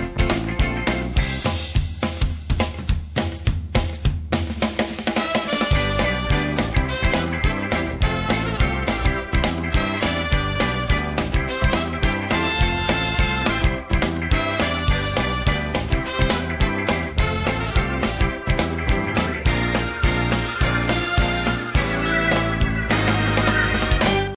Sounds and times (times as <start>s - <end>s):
Music: 0.0s - 24.3s.